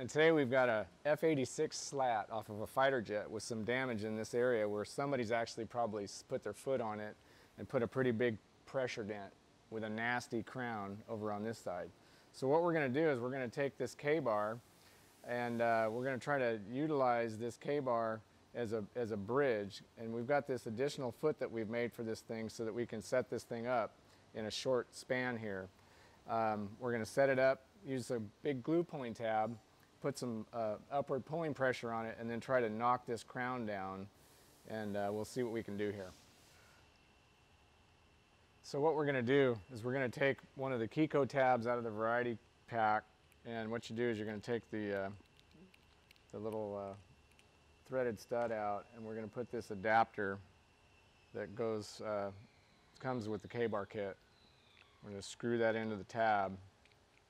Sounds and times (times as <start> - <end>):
Speech: 0.0 - 14.6, 15.2 - 25.7, 26.3 - 34.1, 34.7 - 36.2, 38.6 - 45.2, 46.3 - 47.0, 47.8 - 50.4, 51.4 - 52.4, 53.0 - 54.2, 55.0 - 56.6.